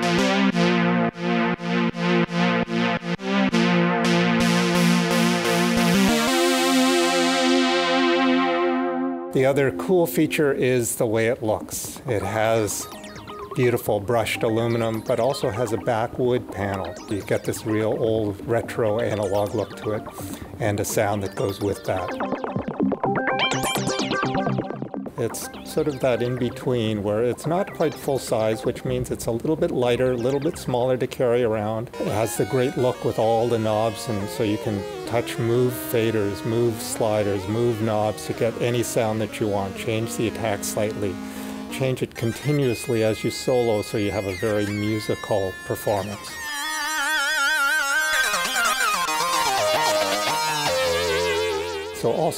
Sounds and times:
Music: 0:00.0 - 0:52.3
Speech: 0:09.4 - 0:12.9, 0:13.6 - 0:22.2, 0:25.2 - 0:46.3, 0:52.0 - 0:52.3.

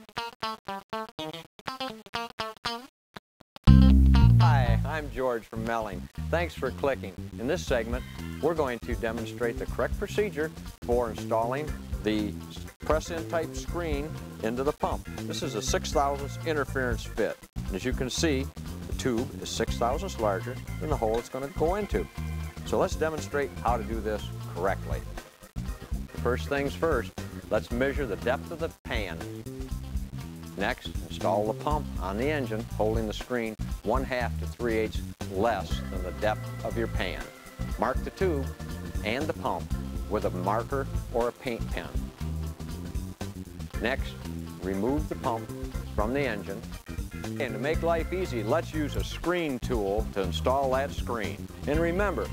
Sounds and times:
Music: 0:00.0 - 0:02.9, 0:03.6 - 0:52.3
Speech: 0:04.4 - 0:25.2, 0:26.1 - 0:29.3, 0:30.6 - 0:42.1, 0:43.8 - 0:46.7, 0:47.4 - 0:52.3.

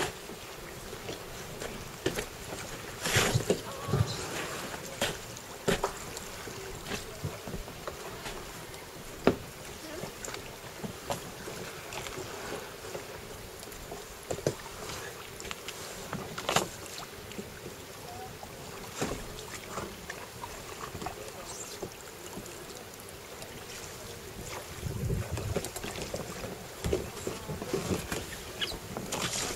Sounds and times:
Rowboat, canoe, kayak: 0:00.0 - 0:29.5.

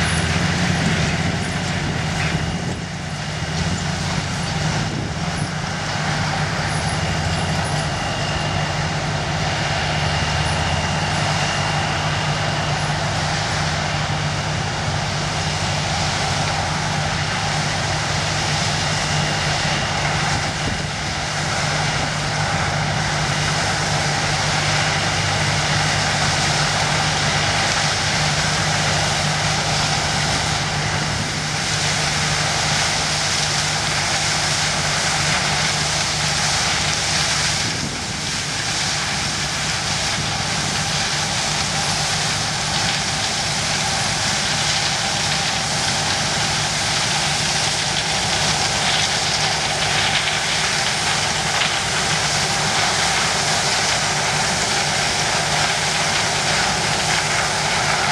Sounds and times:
Outside, rural or natural: 0:00.0 - 0:58.1
Vehicle: 0:00.0 - 0:58.1.

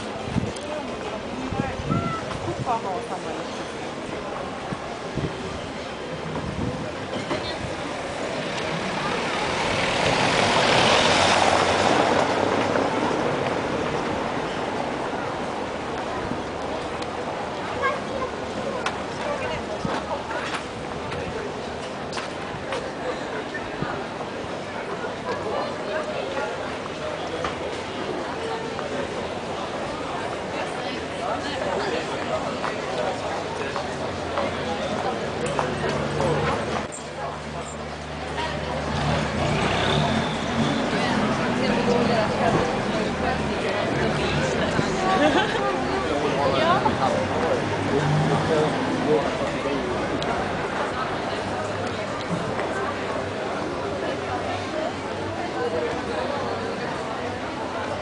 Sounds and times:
Speech: 0:00.0 - 0:58.0.

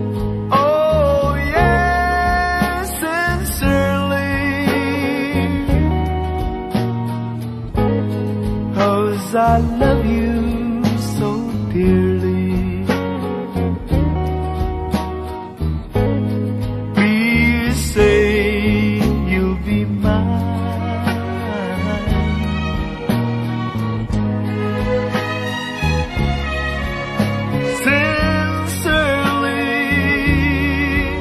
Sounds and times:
Music: 0:00.0 - 0:31.2.

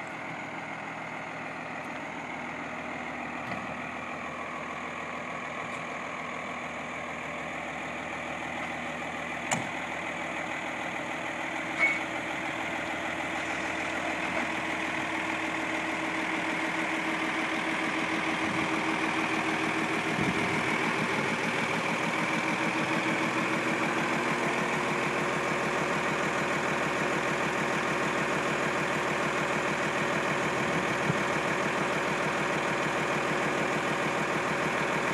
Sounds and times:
Vehicle: 0:00.0 - 0:35.1.

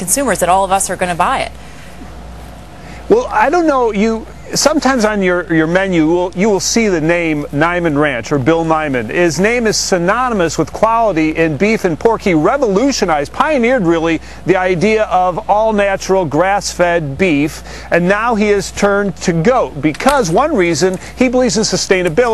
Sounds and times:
Speech: 0:00.0 - 0:01.5, 0:03.1 - 0:22.3.

